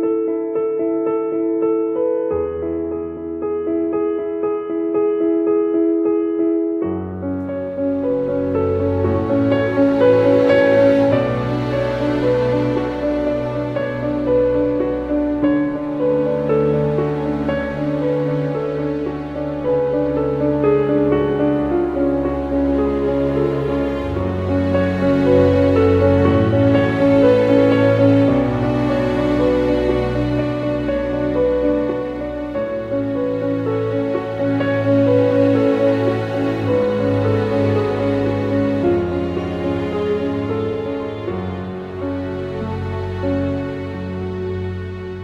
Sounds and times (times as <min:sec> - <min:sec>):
Music: 0:00.0 - 0:45.2.